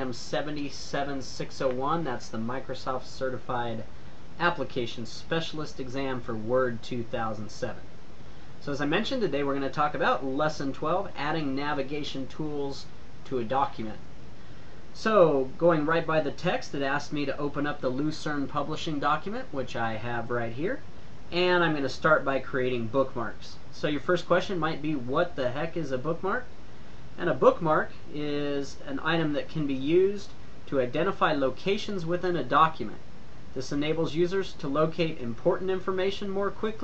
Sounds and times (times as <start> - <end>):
Speech: 0.0 - 7.9, 8.6 - 14.0, 14.9 - 26.5, 27.2 - 33.0, 33.6 - 36.8.